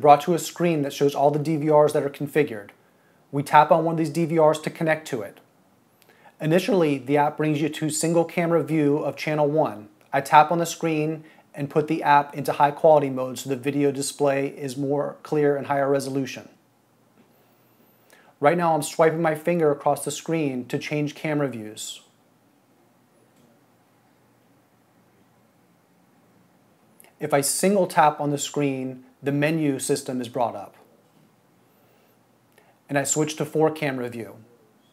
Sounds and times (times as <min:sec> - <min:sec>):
Speech: 0:00.0 - 0:05.5, 0:06.4 - 0:16.6, 0:18.4 - 0:22.1, 0:27.2 - 0:30.9, 0:32.9 - 0:34.5.